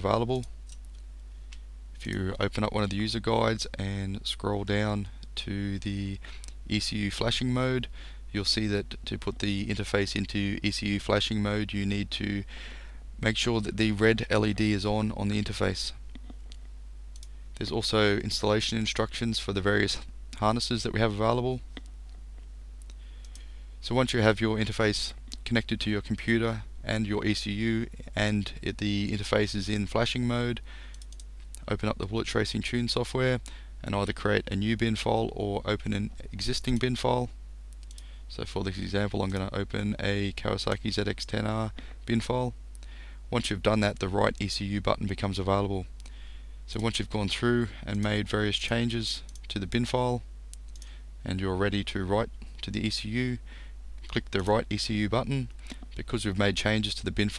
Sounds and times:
Speech: 0.0 - 0.5, 2.0 - 12.5, 13.2 - 16.0, 17.6 - 21.7, 23.8 - 30.7, 31.6 - 37.4, 38.3 - 42.6, 43.3 - 45.9, 46.7 - 50.3, 51.2 - 53.4, 54.0 - 57.3.

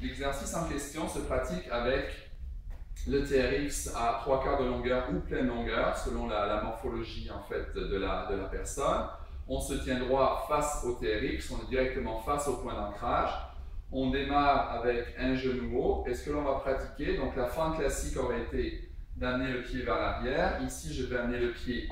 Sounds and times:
Speech: 0.0 - 2.2, 3.0 - 21.9.

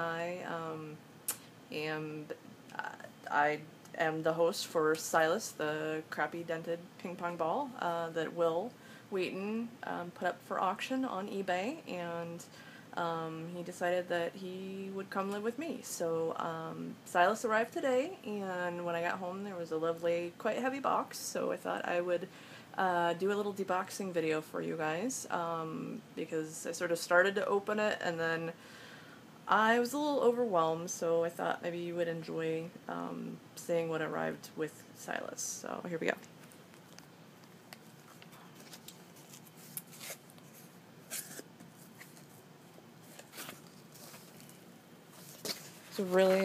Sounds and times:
Speech: 1.7 - 28.6, 29.5 - 36.3, 45.9 - 46.4.

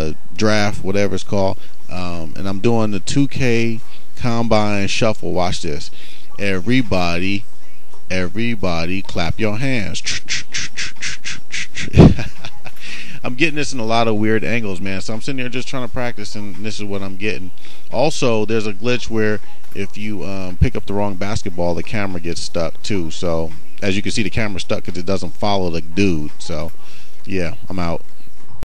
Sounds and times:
Speech: 0.0 - 28.6.

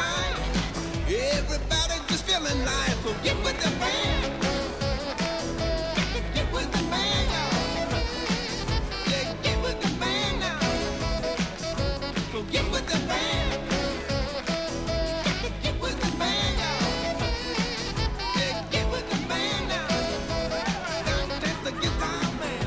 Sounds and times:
Music: 0.0 - 22.6.

